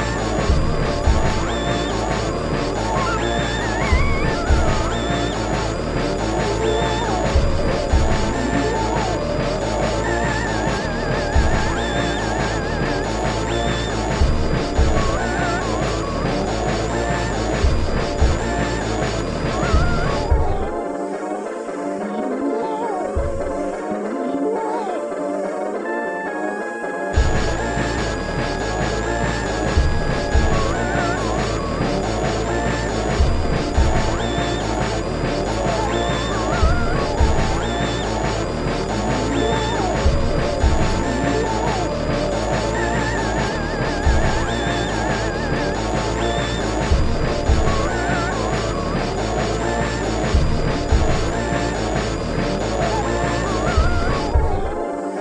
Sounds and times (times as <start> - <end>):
Soundtrack music: 0.0 - 55.2.